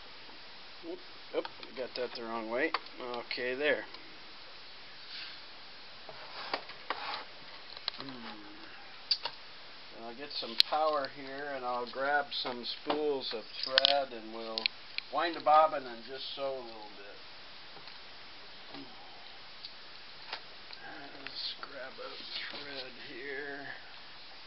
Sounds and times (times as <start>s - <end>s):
Speech: 0.8s - 4.0s, 10.0s - 17.2s, 20.8s - 23.9s.